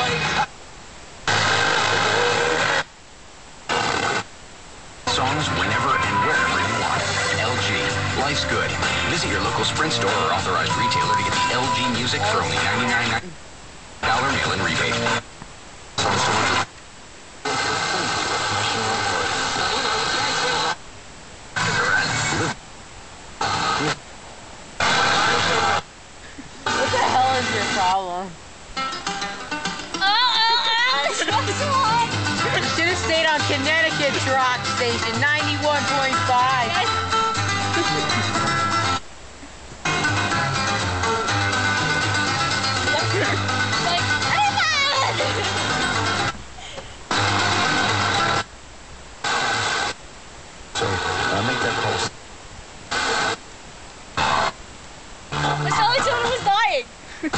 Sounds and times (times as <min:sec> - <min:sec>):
Radio: 0:00.0 - 0:00.5, 0:01.2 - 0:02.9, 0:03.7 - 0:04.3, 0:05.0 - 0:13.4, 0:14.0 - 0:15.3, 0:16.0 - 0:16.8, 0:17.4 - 0:20.8, 0:21.5 - 0:22.6, 0:23.4 - 0:24.1, 0:24.8 - 0:28.4, 0:30.2 - 0:40.1, 0:41.8 - 0:48.5, 0:49.2 - 0:50.0, 0:50.7 - 0:52.2, 0:52.9 - 0:53.4, 0:54.2 - 0:54.6, 0:55.3 - 0:57.3
Speech: 0:05.1 - 0:13.4, 0:14.0 - 0:15.2, 0:17.6 - 0:20.7, 0:26.8 - 0:28.4, 0:30.0 - 0:36.9, 0:50.8 - 0:52.1, 0:55.5 - 0:56.9.